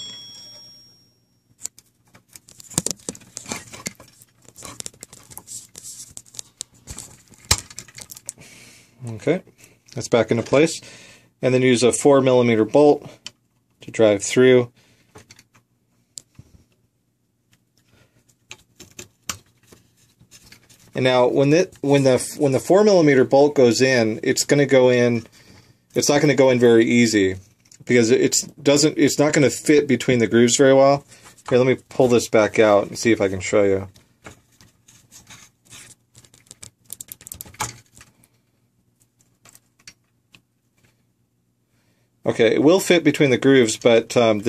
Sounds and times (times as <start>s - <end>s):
Speech: 9.0s - 10.8s, 11.4s - 13.2s, 13.8s - 14.7s, 21.0s - 25.3s, 26.0s - 34.0s, 42.2s - 44.4s.